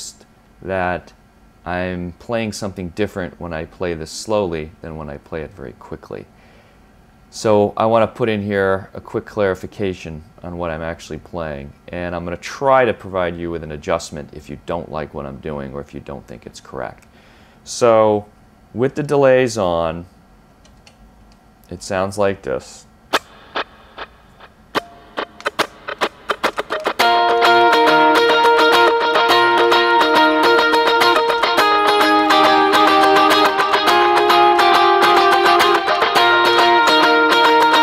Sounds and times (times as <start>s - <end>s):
Speech: 0.0s - 6.3s, 7.3s - 17.0s, 17.7s - 20.2s, 21.7s - 22.9s.